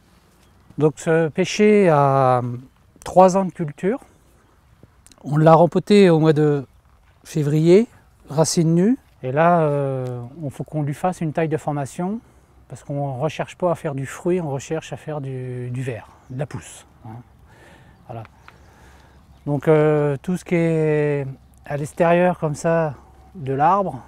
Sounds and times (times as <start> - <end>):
Speech: 0.8 - 4.1, 5.1 - 17.3, 18.1 - 18.3, 19.4 - 24.0.